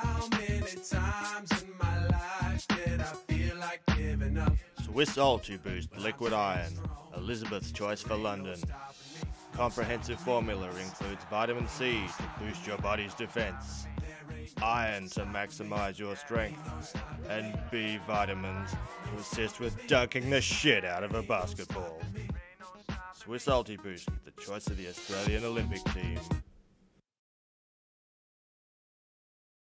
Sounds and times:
Music: 0:00.0 - 0:26.5
Speech: 0:04.8 - 0:08.7, 0:09.6 - 0:13.9, 0:14.6 - 0:16.6, 0:17.2 - 0:22.1, 0:23.2 - 0:26.3.

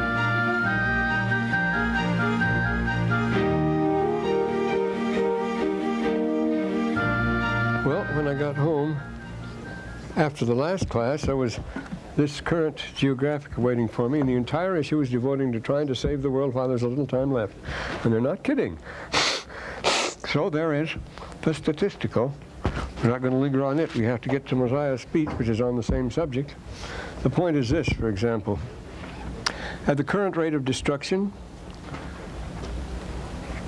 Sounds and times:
Music: 0:00.0 - 0:10.4
Male speech, man speaking: 0:07.8 - 0:09.0, 0:10.2 - 0:11.6, 0:12.2 - 0:18.8, 0:20.3 - 0:22.4, 0:23.0 - 0:26.6, 0:27.2 - 0:28.7, 0:29.9 - 0:31.4
Narration, monologue: 0:07.8 - 0:28.8, 0:29.4 - 0:31.8.

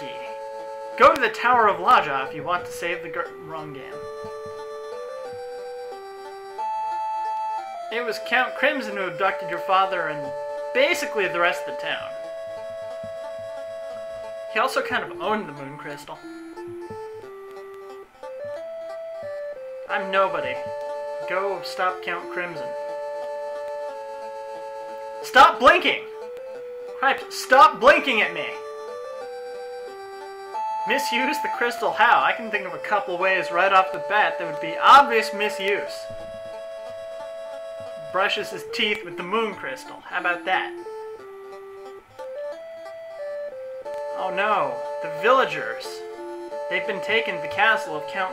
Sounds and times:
Speech: 0:00.0 - 0:00.4, 0:01.0 - 0:04.0, 0:07.9 - 0:12.1, 0:14.6 - 0:16.2, 0:19.9 - 0:22.7, 0:25.2 - 0:26.1, 0:27.0 - 0:28.6, 0:30.9 - 0:36.1, 0:38.1 - 0:40.8, 0:44.2 - 0:46.0, 0:46.7 - 0:48.3
Music: 0:00.0 - 0:48.3.

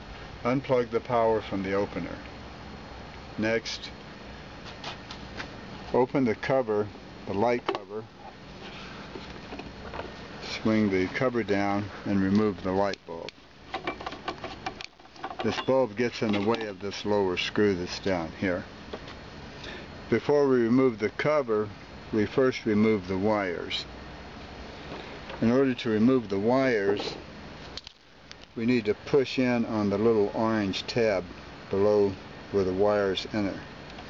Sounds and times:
Speech: 0:00.4 - 0:02.3, 0:03.4 - 0:04.0, 0:05.9 - 0:08.1, 0:10.4 - 0:13.4, 0:15.4 - 0:18.7, 0:20.1 - 0:23.9, 0:25.4 - 0:27.2, 0:28.6 - 0:33.7.

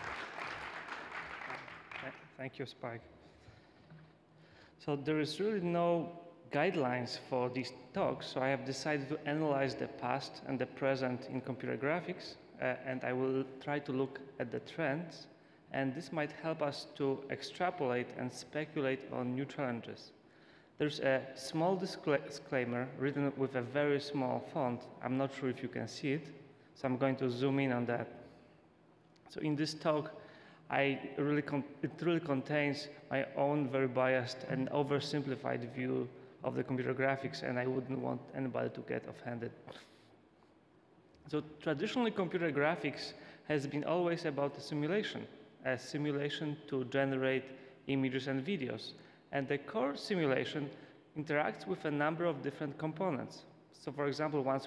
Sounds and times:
Male speech, man speaking: 0:02.0 - 0:03.1, 0:04.8 - 0:20.2, 0:20.8 - 0:28.1, 0:29.2 - 0:39.8, 0:41.2 - 0:54.6.

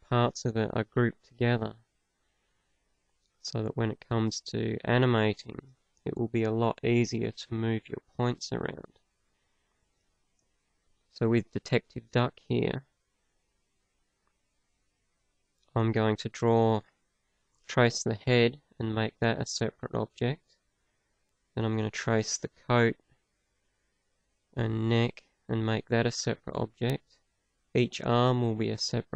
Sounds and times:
Speech: 0:00.0 - 0:01.8, 0:03.5 - 0:08.9, 0:11.2 - 0:12.8, 0:15.7 - 0:16.8, 0:17.7 - 0:20.4, 0:21.6 - 0:23.0, 0:24.6 - 0:27.0, 0:27.8 - 0:29.1.

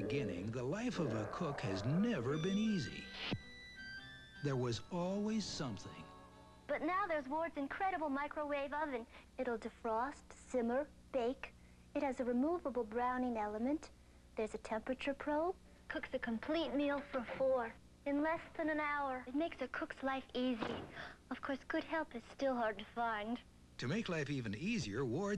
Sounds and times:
Speech: 0:00.0 - 0:03.0, 0:04.5 - 0:06.1, 0:06.7 - 0:25.3.

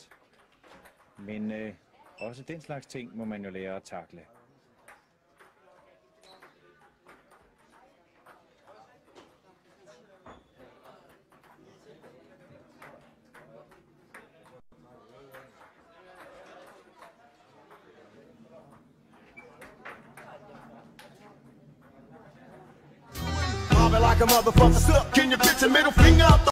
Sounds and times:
Music: 0:23.1 - 0:26.5.

